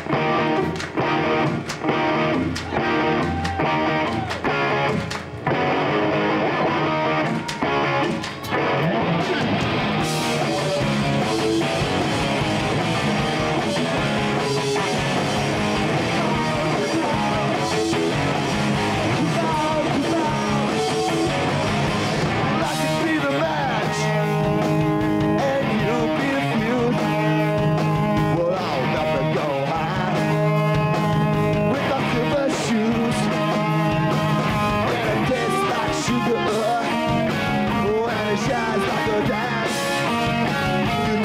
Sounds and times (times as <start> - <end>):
Music: 0.0 - 41.2.